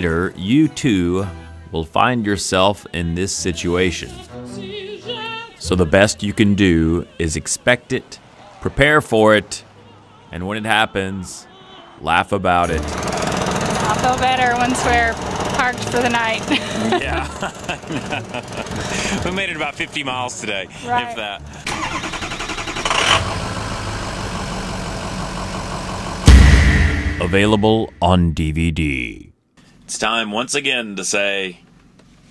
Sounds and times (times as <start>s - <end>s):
Vehicle: 12.6s - 26.4s
Speech: 19.2s - 21.4s, 27.2s - 29.3s, 29.9s - 31.6s.